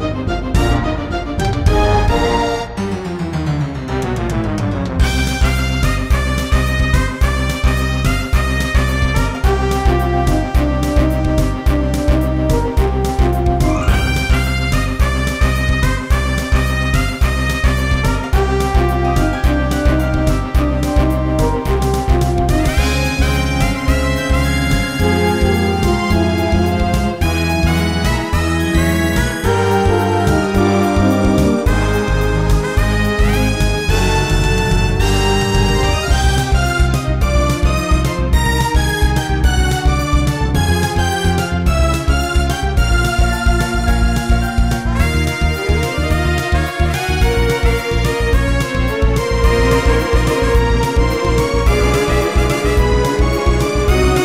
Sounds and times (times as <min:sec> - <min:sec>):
Video game music: 0:00.0 - 0:54.2.